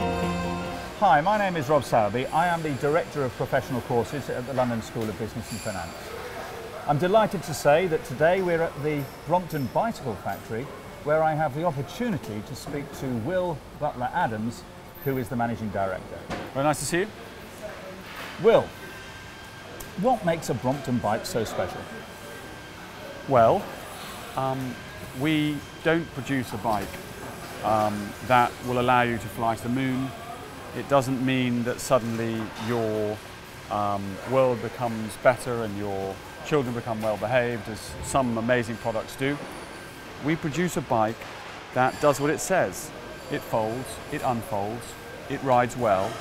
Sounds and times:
Speech: 0:01.0 - 0:06.0, 0:06.8 - 0:17.2, 0:18.4 - 0:18.8, 0:20.0 - 0:22.0, 0:23.2 - 0:23.7, 0:24.4 - 0:27.0, 0:27.6 - 0:39.4, 0:40.2 - 0:41.2, 0:41.8 - 0:46.2.

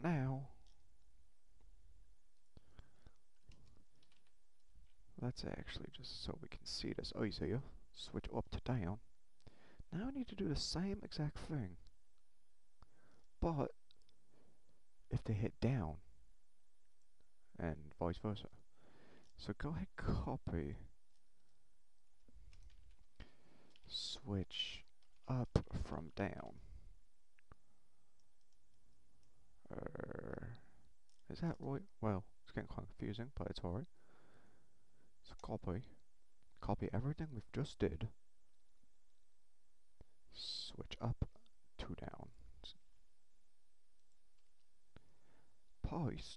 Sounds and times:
Speech: 0:00.0 - 0:00.6, 0:05.2 - 0:09.0, 0:09.9 - 0:11.9, 0:13.4 - 0:13.8, 0:15.1 - 0:16.1, 0:17.6 - 0:18.6, 0:19.4 - 0:20.9, 0:23.9 - 0:26.7, 0:29.6 - 0:33.9, 0:35.2 - 0:36.0, 0:36.6 - 0:38.2, 0:40.3 - 0:42.8, 0:45.8 - 0:46.3
Inside, small room: 0:00.0 - 0:46.3
Clicking: 0:00.6 - 0:00.8, 0:02.3 - 0:05.0, 0:11.8 - 0:14.2, 0:21.1 - 0:23.9, 0:24.8 - 0:25.3, 0:30.8 - 0:31.7.

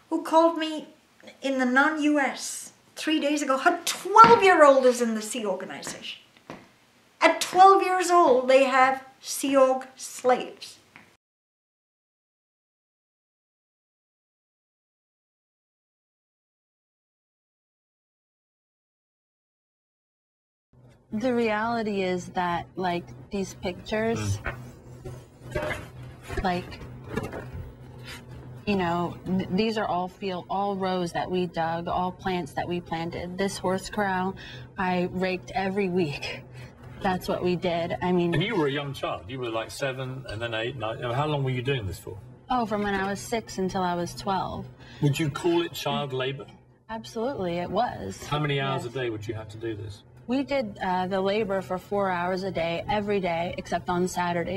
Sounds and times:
Speech: 0:21.2 - 0:24.5, 0:26.4 - 0:26.8, 0:28.7 - 0:36.4, 0:37.0 - 0:54.5.

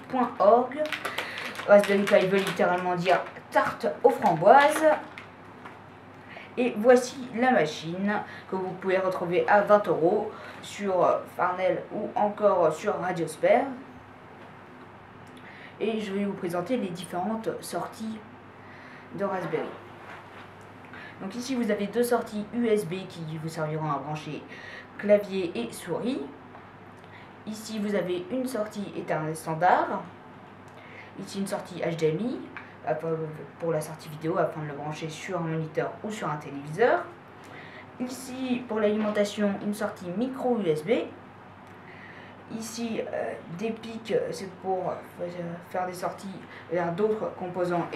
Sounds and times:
Speech: 0:00.0 - 0:05.2, 0:06.6 - 0:13.9, 0:15.8 - 0:18.3, 0:19.2 - 0:19.8, 0:21.2 - 0:26.4, 0:27.4 - 0:30.2, 0:31.2 - 0:37.2, 0:38.0 - 0:41.2, 0:42.5 - 0:47.9.

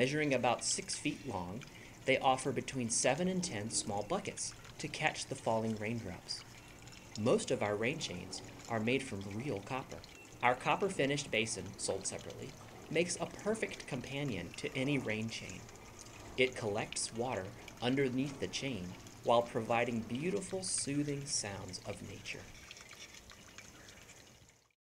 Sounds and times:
Raindrop: 0:00.0 - 0:24.8.

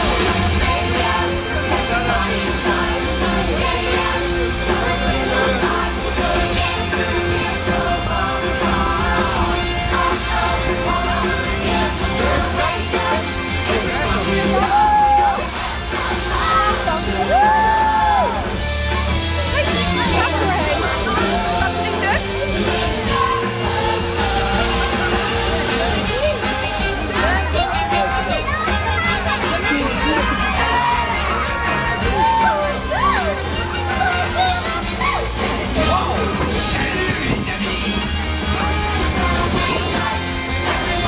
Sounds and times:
Music: 0:00.0 - 0:41.0
Speech: 0:00.0 - 0:41.0.

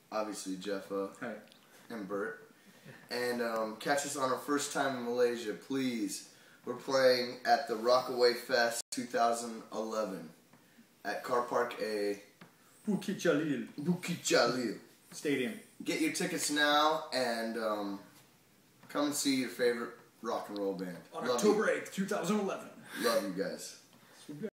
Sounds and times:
Speech: 0:00.0 - 0:02.4, 0:03.1 - 0:10.4, 0:11.0 - 0:18.1, 0:18.9 - 0:24.5.

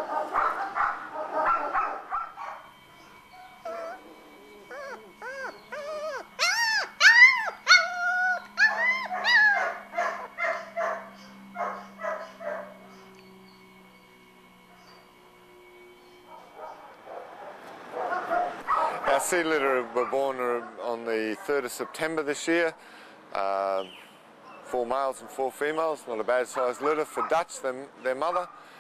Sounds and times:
Dog: 0:00.0 - 0:02.6, 0:03.3 - 0:13.1, 0:16.3 - 0:19.3, 0:20.0 - 0:22.1, 0:26.5 - 0:27.7, 0:28.3 - 0:28.6.

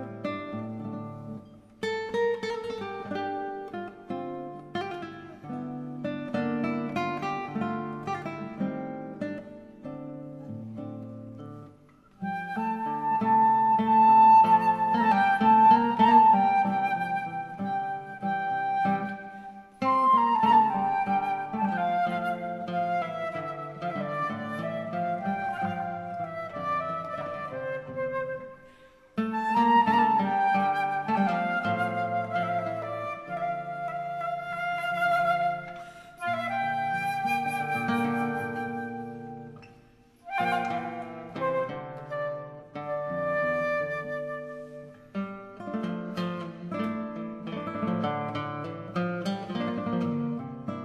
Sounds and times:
Guitar: 0:00.0 - 0:50.8.

